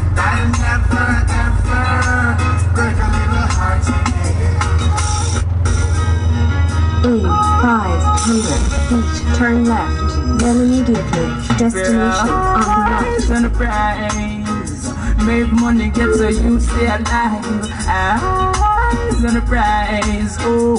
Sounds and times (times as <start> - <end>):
Music: 0.0 - 20.7.